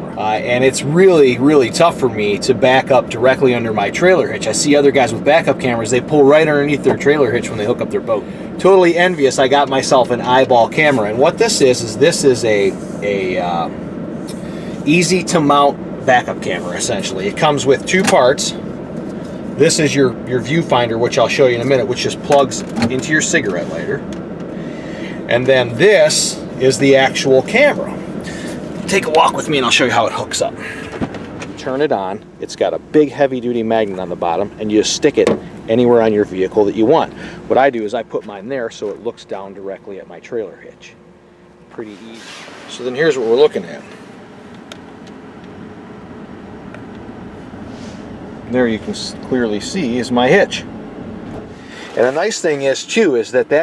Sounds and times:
Speech: 0:00.1 - 0:13.7, 0:14.8 - 0:18.6, 0:19.6 - 0:24.0, 0:25.3 - 0:28.0, 0:28.9 - 0:30.6, 0:31.6 - 0:41.0, 0:41.7 - 0:43.9, 0:48.5 - 0:50.7, 0:51.9 - 0:53.6.

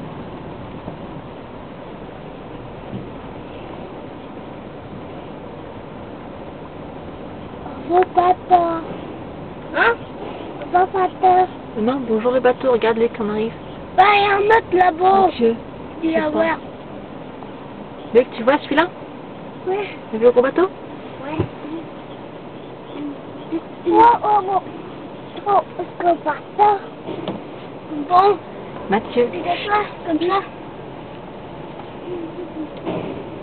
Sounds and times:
Speech: 0:10.7 - 0:16.6, 0:27.9 - 0:30.5.

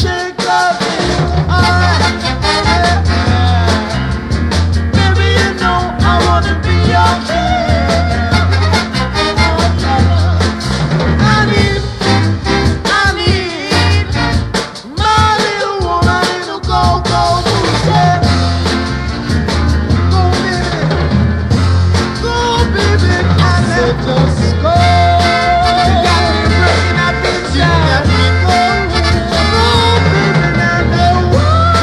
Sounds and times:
Rock and roll: 0:00.0 - 0:31.8.

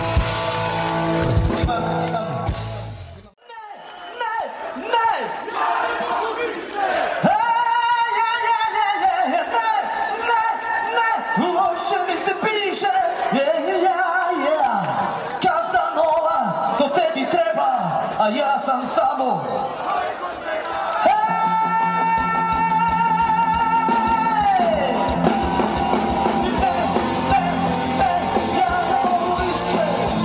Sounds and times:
Music: 0:00.0 - 0:03.3, 0:18.0 - 0:30.2
Speech: 0:07.2 - 0:19.6.

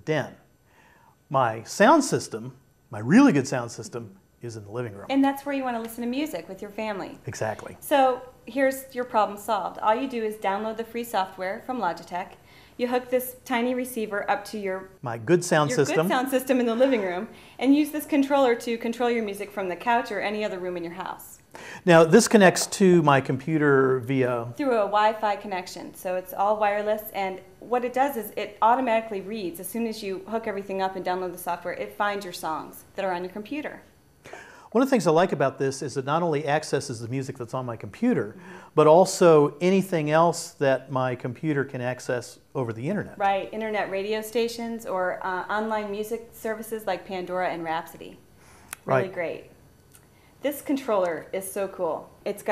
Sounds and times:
Speech: 0:01.3 - 0:08.2, 0:12.9 - 0:21.2, 0:21.9 - 0:33.8, 0:34.8 - 0:48.2, 0:48.8 - 0:49.5.

